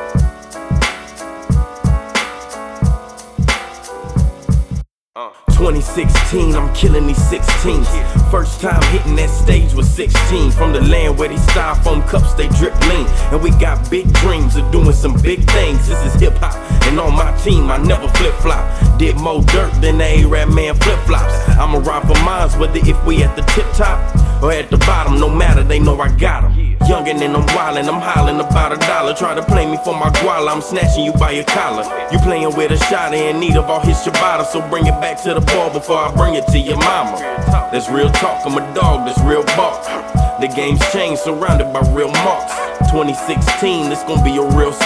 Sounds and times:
Pop music: 0:00.0 - 0:44.8.

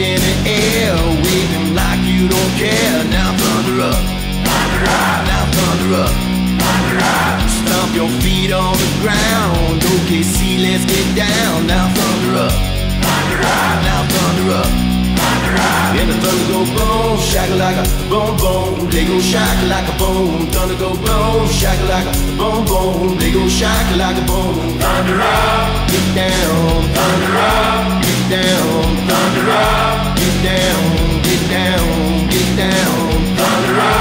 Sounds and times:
Dance music: 0:00.0 - 0:17.6, 0:22.2 - 0:34.0.

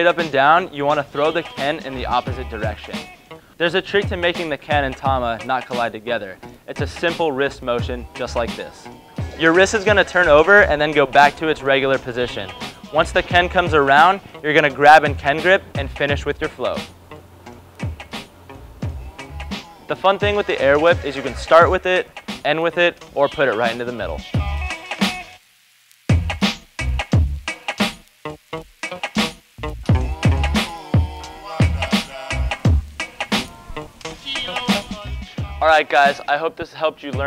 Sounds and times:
Speech: 0:00.0 - 0:16.9, 0:19.9 - 0:24.2, 0:35.6 - 0:37.2
Music: 0:00.0 - 0:25.4, 0:26.1 - 0:37.2.

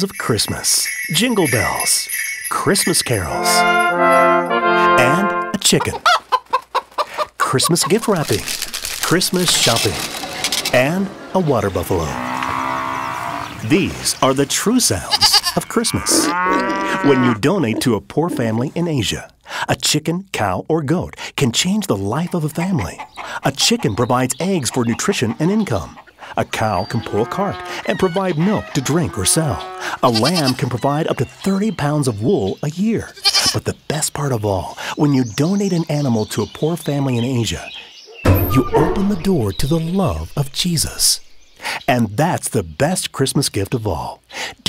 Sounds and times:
Speech: 0:00.0 - 0:03.7, 0:04.9 - 0:06.0, 0:07.4 - 0:10.1, 0:10.7 - 0:12.2, 0:13.6 - 0:16.3, 0:16.9 - 0:44.6.

